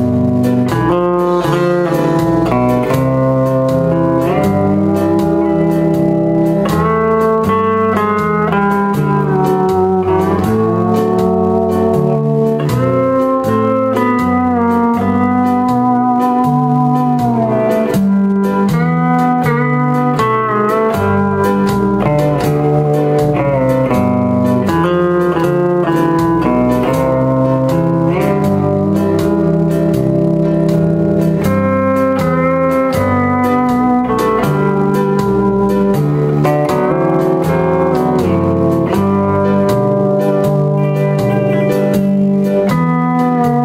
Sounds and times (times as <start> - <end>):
Blues: 0.0 - 43.6.